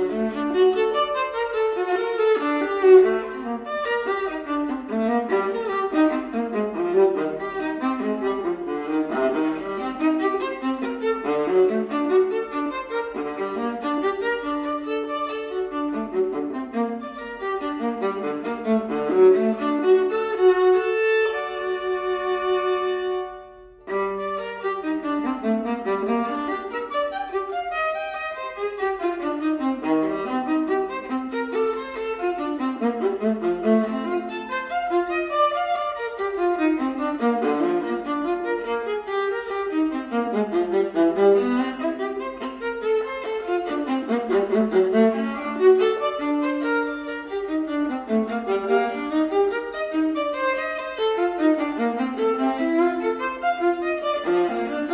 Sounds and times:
Violin, fiddle: 0:00.0 - 0:54.9.

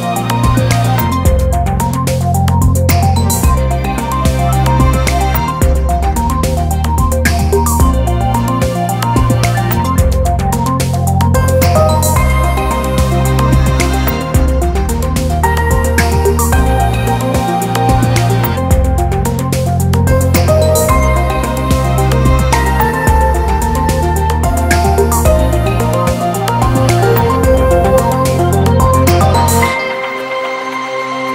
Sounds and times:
Background music: 0:00.0 - 0:31.3.

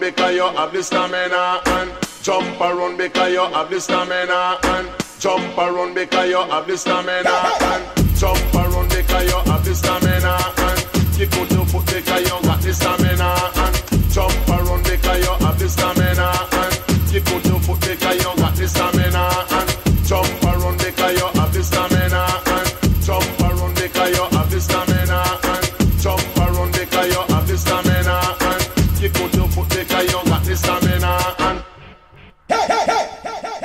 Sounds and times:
Reggae: 0:00.0 - 0:33.6.

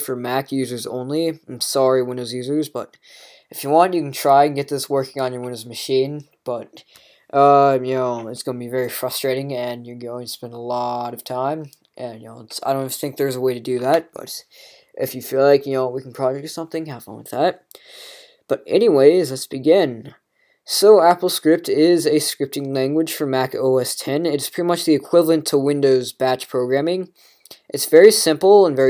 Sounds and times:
Speech: 0:00.0 - 0:17.7, 0:18.5 - 0:28.8.

